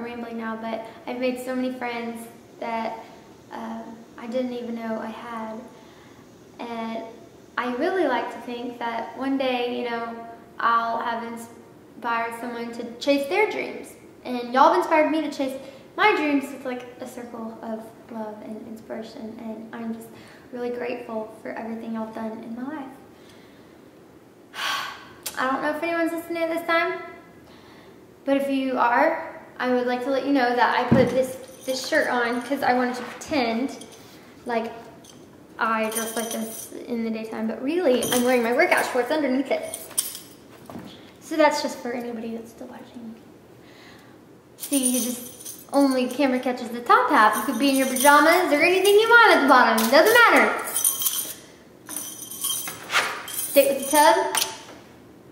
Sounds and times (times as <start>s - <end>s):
Speech: 0.0s - 5.7s, 6.6s - 23.0s, 25.3s - 27.2s, 28.2s - 33.8s, 34.4s - 34.8s, 35.6s - 39.8s, 41.2s - 43.2s, 44.6s - 45.2s, 45.8s - 50.7s, 53.6s - 54.4s
Inside, small room: 0.0s - 55.3s.